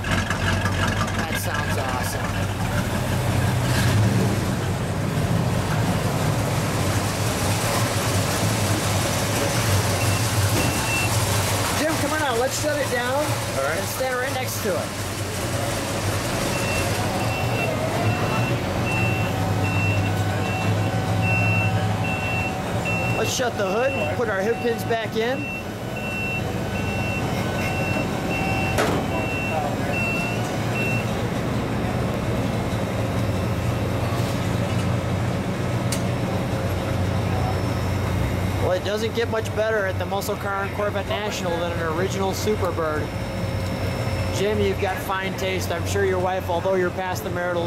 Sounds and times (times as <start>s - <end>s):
Vehicle: 0.0s - 47.6s.